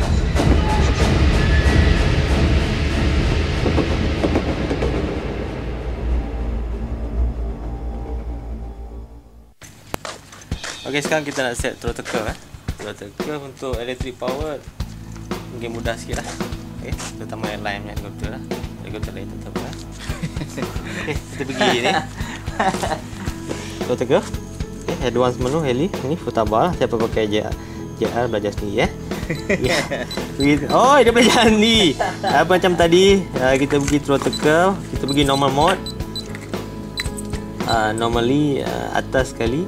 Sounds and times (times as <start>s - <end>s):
Music: 0.0s - 9.6s, 10.4s - 39.6s
Speech: 10.8s - 14.6s, 15.5s - 19.8s, 30.4s - 35.8s, 37.7s - 39.6s.